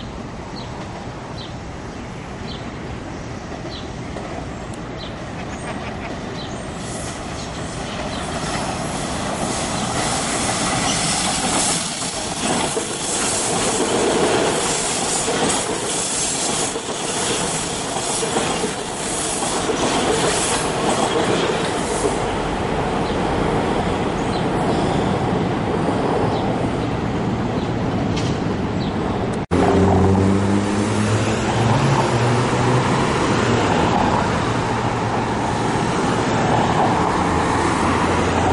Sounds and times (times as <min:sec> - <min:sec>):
Subway, metro, underground: 0:00.0 - 0:38.5
Traffic noise, roadway noise: 0:00.0 - 0:38.5
Train: 0:00.0 - 0:38.5.